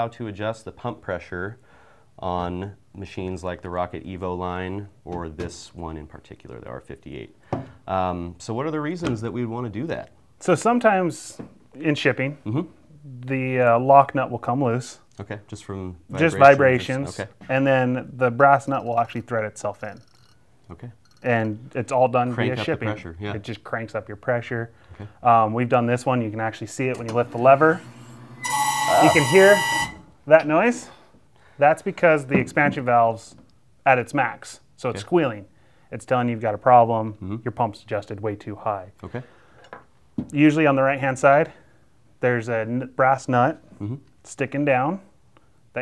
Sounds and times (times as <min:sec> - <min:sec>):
Speech: 0:00.0 - 0:01.6, 0:02.2 - 0:20.0, 0:20.7 - 0:27.8, 0:29.0 - 0:29.6, 0:30.3 - 0:31.0, 0:31.6 - 0:39.2, 0:40.3 - 0:41.6, 0:42.2 - 0:45.1.